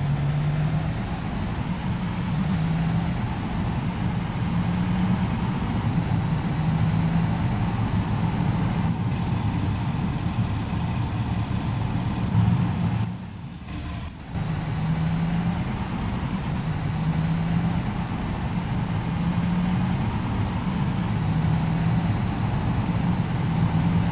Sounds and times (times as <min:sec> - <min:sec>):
Bus: 0:00.0 - 0:24.1.